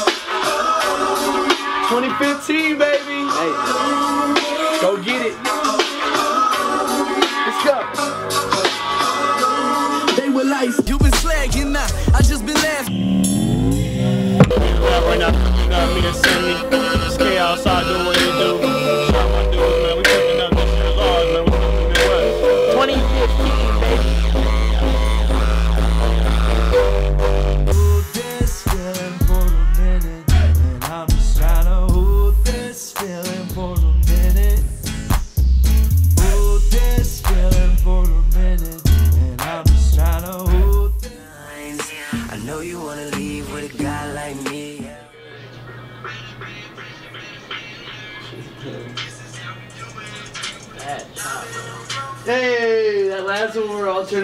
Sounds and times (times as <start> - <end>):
Music: 0.0 - 54.2.